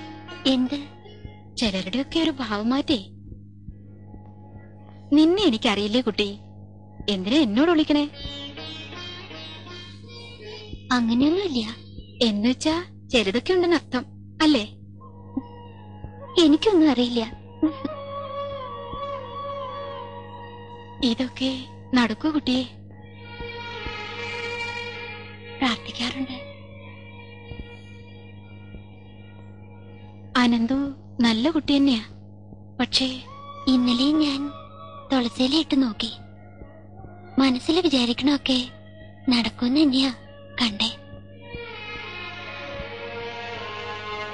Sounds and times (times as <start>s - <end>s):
Inside, small room: 0.0s - 44.3s
Music: 0.0s - 44.3s
Speech: 0.4s - 3.1s, 5.1s - 6.5s, 7.1s - 8.4s, 9.8s - 14.8s, 16.2s - 18.0s, 21.0s - 23.5s, 25.6s - 26.5s, 30.4s - 32.2s, 32.8s - 41.8s.